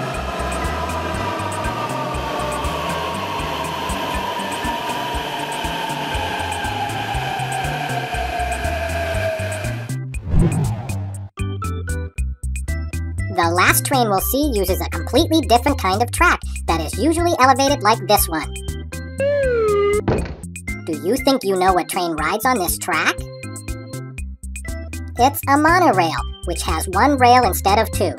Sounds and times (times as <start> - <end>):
Train: 0.0 - 9.9
Music for children: 11.4 - 28.1
Speech: 13.4 - 18.5, 20.9 - 23.2, 25.2 - 28.1.